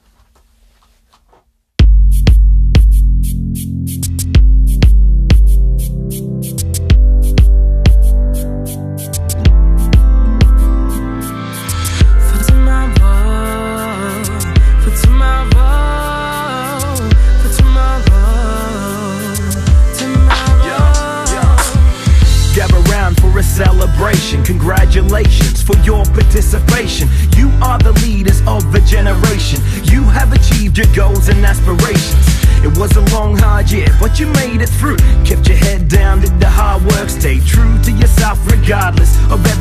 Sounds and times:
Music: 0:01.8 - 0:39.6.

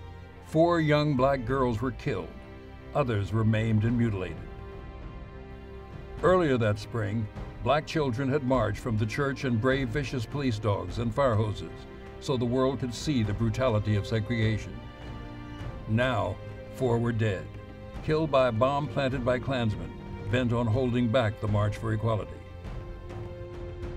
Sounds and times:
Music: 0:00.0 - 0:23.9
Male speech, man speaking: 0:00.5 - 0:04.5, 0:06.2 - 0:14.8, 0:15.9 - 0:22.4.

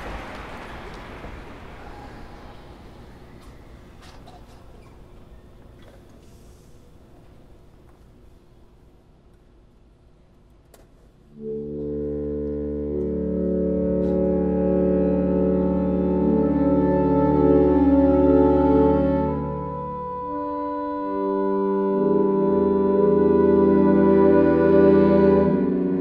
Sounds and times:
Brass instrument: 0:11.3 - 0:26.0.

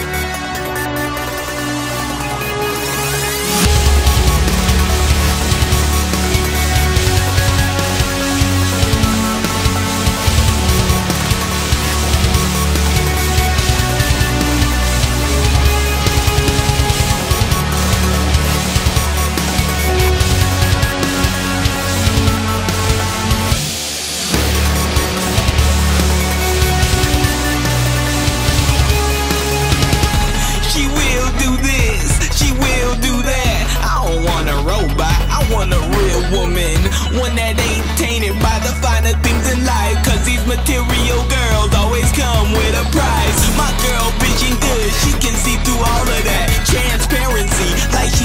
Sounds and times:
Dubstep: 0:00.0 - 0:48.2.

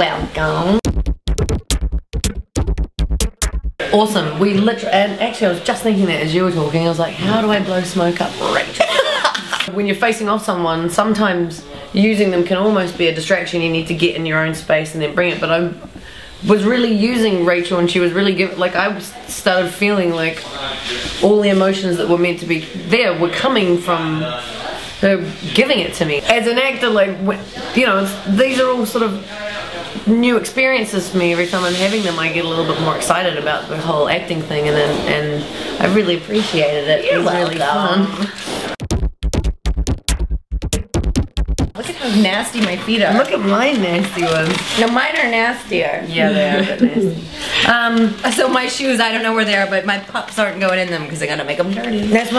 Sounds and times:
Speech: 0:03.8 - 0:08.9, 0:09.6 - 0:38.4, 0:41.8 - 0:52.3.

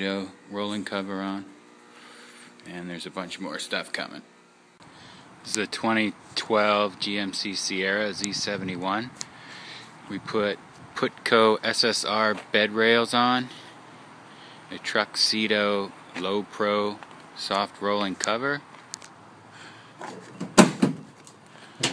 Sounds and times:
Speech: 0:00.0 - 0:01.6, 0:02.6 - 0:04.3, 0:05.5 - 0:09.2, 0:10.1 - 0:13.6, 0:14.7 - 0:18.7.

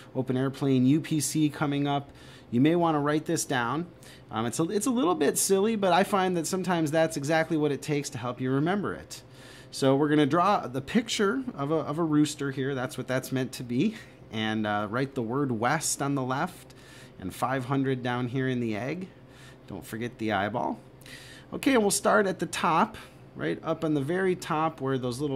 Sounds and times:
Speech: 0:00.0 - 0:19.1, 0:19.7 - 0:20.8, 0:21.5 - 0:25.3.

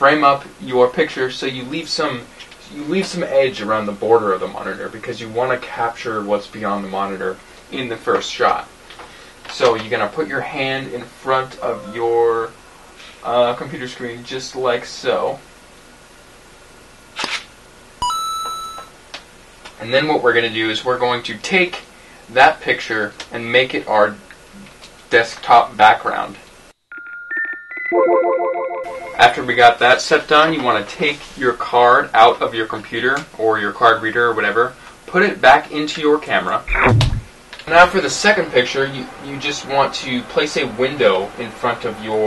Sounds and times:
Speech: 0:00.0 - 0:08.7, 0:09.5 - 0:15.4, 0:19.8 - 0:26.5, 0:29.2 - 0:36.9, 0:37.6 - 0:42.2
Inside, small room: 0:00.0 - 0:42.2.

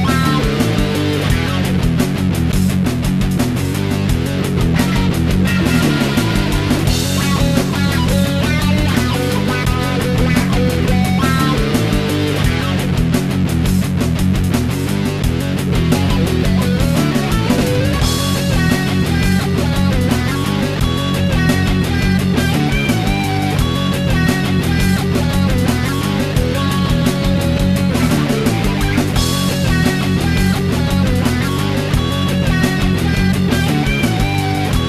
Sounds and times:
Rhythm and blues: 0:00.0 - 0:34.8.

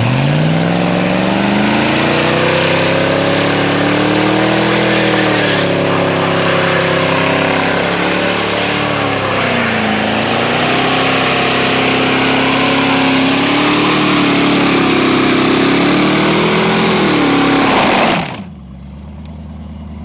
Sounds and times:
Car: 0:00.0 - 0:20.0.

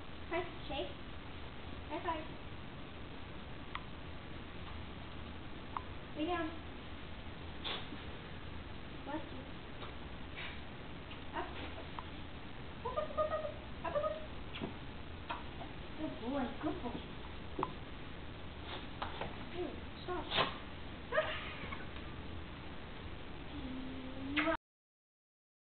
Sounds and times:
Speech: 0:11.3 - 0:11.7, 0:16.0 - 0:17.1, 0:19.5 - 0:20.3.

